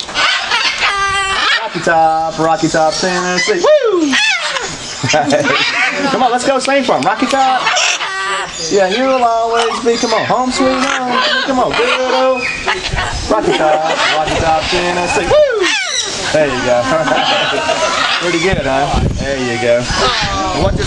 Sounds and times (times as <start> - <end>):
Bird: 0.0 - 20.8.